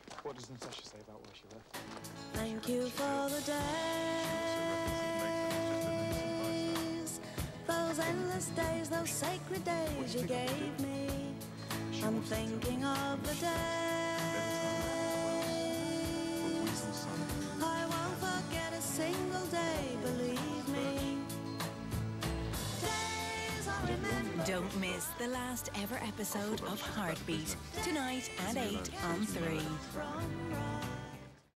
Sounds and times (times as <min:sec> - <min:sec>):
Speech: 0:00.1 - 0:01.6, 0:04.2 - 0:11.2, 0:11.9 - 0:18.2, 0:23.8 - 0:30.2
Music: 0:01.7 - 0:31.5.